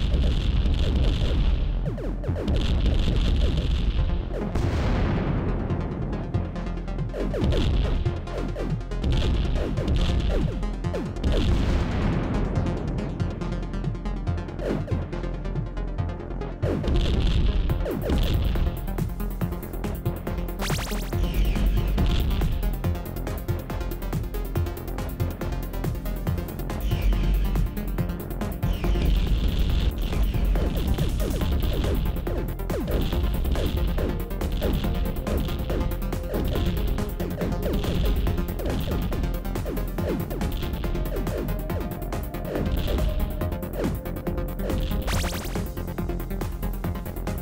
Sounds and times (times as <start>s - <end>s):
Music: 0.0s - 47.4s.